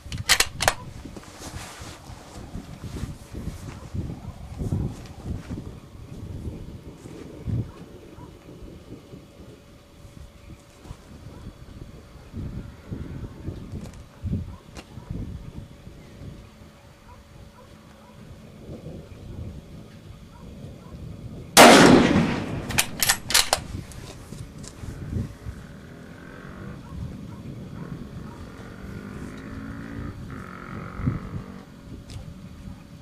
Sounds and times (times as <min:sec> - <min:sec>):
Outside, rural or natural: 0:00.0 - 0:33.0.